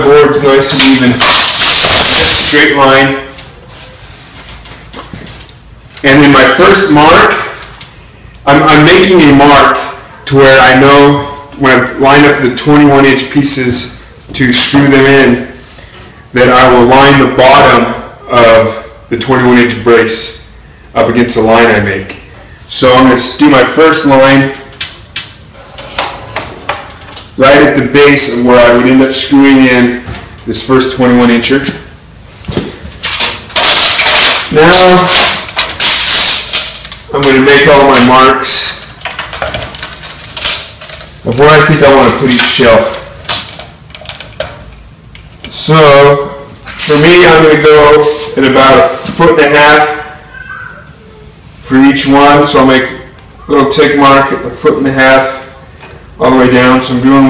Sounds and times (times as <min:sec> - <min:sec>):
Speech: 0:00.0 - 0:03.4, 0:06.0 - 0:07.6, 0:08.4 - 0:15.6, 0:16.3 - 0:24.7, 0:27.4 - 0:31.9, 0:34.5 - 0:35.2, 0:37.1 - 0:38.8, 0:41.2 - 0:43.1, 0:45.5 - 0:51.0, 0:51.7 - 0:55.6, 0:56.2 - 0:57.2.